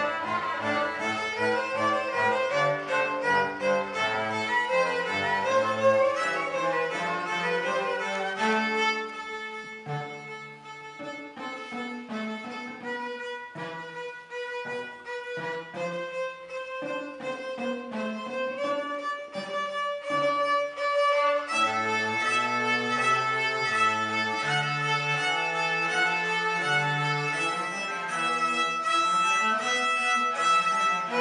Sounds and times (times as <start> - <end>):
Cello: 0.0 - 31.2
Violin, fiddle: 0.0 - 31.2.